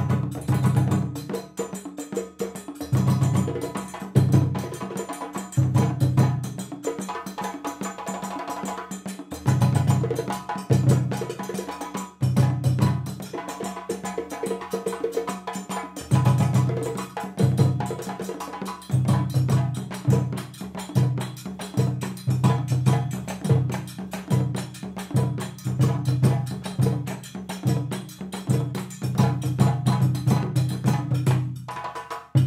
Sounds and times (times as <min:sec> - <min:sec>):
Drum: 0:00.0 - 0:32.4.